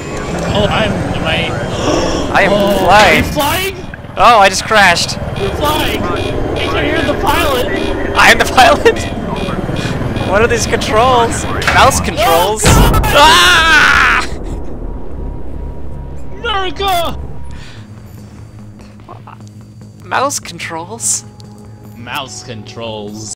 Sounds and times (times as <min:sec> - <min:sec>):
Music: 0:14.6 - 0:23.3.